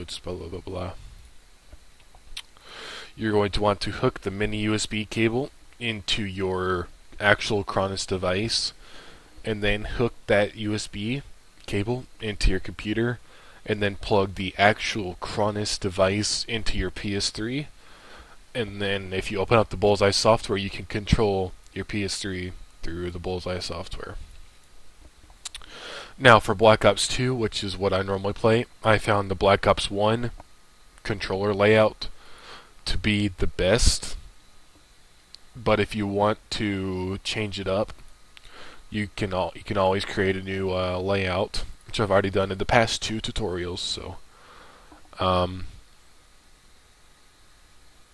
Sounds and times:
Speech: 0.0s - 1.0s, 3.2s - 8.8s, 9.4s - 17.7s, 18.5s - 24.2s, 26.2s - 30.4s, 31.0s - 32.1s, 32.8s - 34.3s, 35.5s - 38.0s, 38.9s - 44.2s, 45.2s - 45.8s.

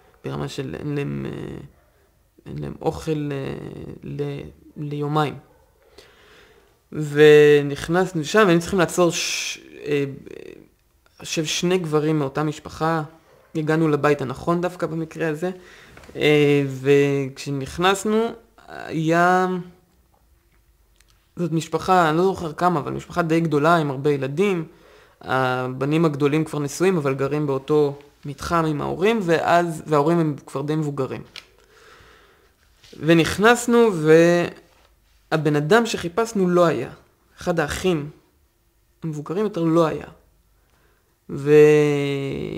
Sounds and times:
Speech: 0.2s - 1.8s, 2.4s - 5.5s, 6.9s - 15.6s, 16.2s - 19.8s, 21.4s - 31.4s, 32.9s - 34.7s, 35.3s - 38.3s, 39.0s - 40.3s, 41.3s - 42.5s.

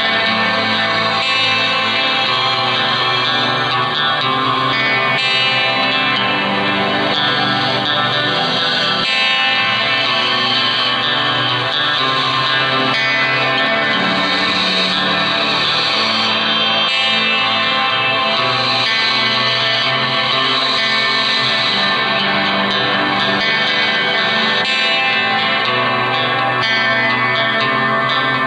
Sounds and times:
Guitar: 0.0s - 28.4s.

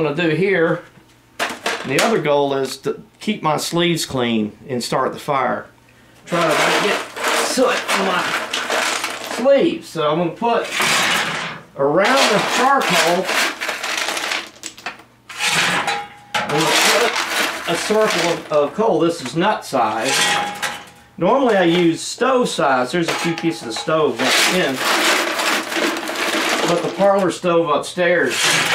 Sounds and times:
Speech: 0.0s - 0.9s, 1.8s - 5.7s, 6.3s - 8.4s, 9.3s - 10.7s, 11.8s - 13.3s, 16.5s - 20.2s, 21.2s - 24.9s, 26.6s - 28.5s.

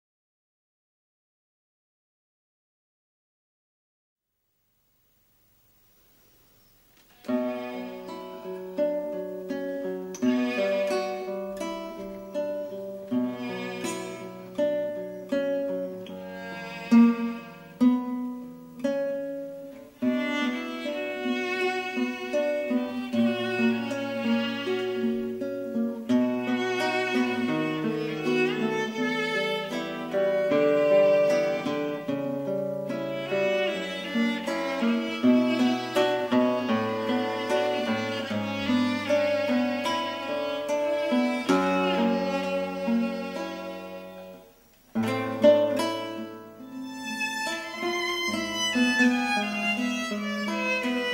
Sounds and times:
Pizzicato: 7.2s - 18.3s, 19.5s - 44.5s, 45.1s - 51.1s.

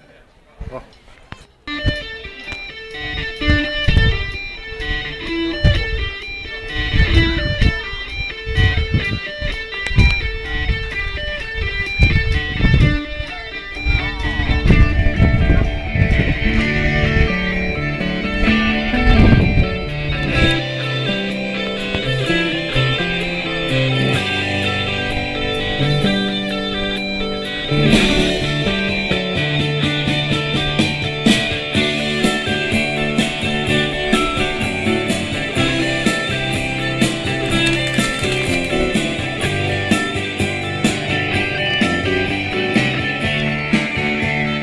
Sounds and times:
Music: 1.7s - 44.6s.

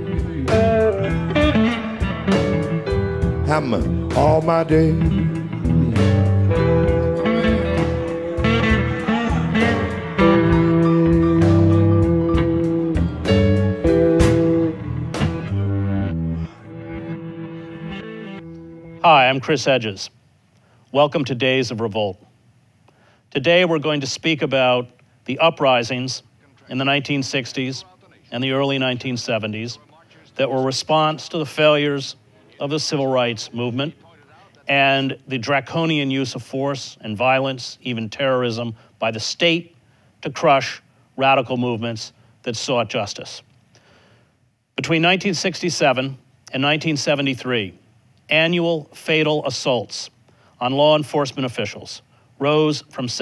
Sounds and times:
Music: 0.0s - 19.1s
Speech: 3.5s - 5.0s, 19.1s - 20.2s, 20.9s - 22.3s, 23.4s - 43.5s, 44.8s - 53.2s.

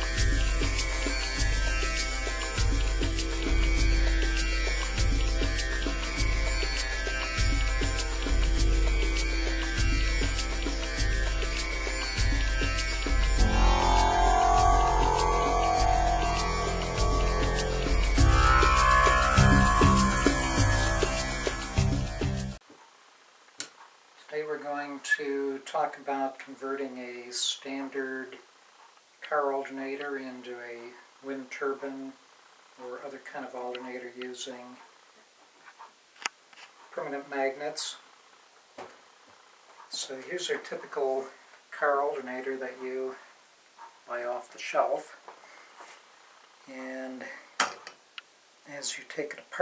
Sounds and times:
Music: 0.0s - 22.6s
Speech: 24.3s - 28.4s, 29.2s - 32.2s, 32.8s - 34.8s, 36.9s - 38.0s, 39.9s - 43.3s, 44.1s - 45.2s, 46.7s - 47.4s, 48.7s - 49.6s.

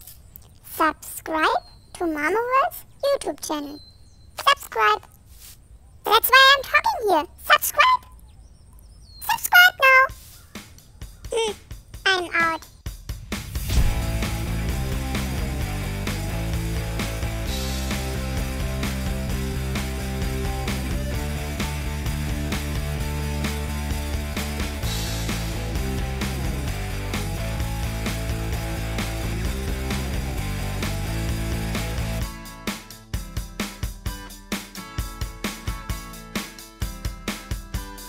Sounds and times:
Speech: 0.7s - 3.8s, 4.4s - 5.1s, 6.0s - 8.1s, 9.2s - 10.2s, 11.3s - 12.7s
Music: 10.1s - 38.0s.

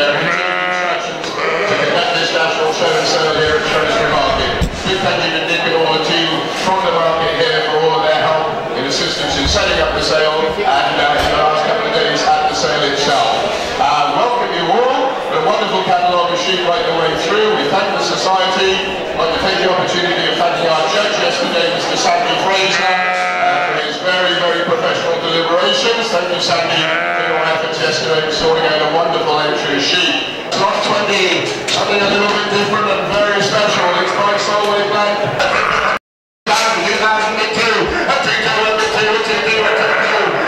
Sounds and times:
Speech: 0.0s - 40.4s
Bleat: 0.2s - 2.0s, 22.8s - 23.8s, 26.8s - 27.5s.

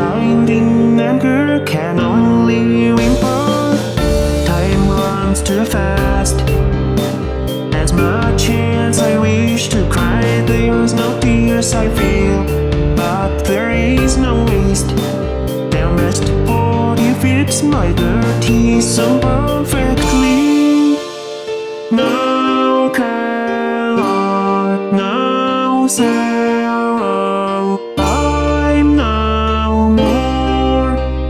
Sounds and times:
Music: 0.0s - 31.2s.

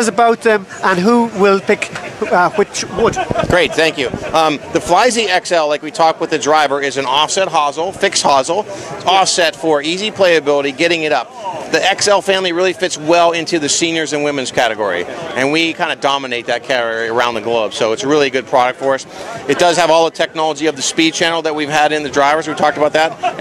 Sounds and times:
Speech: 0.0s - 23.4s.

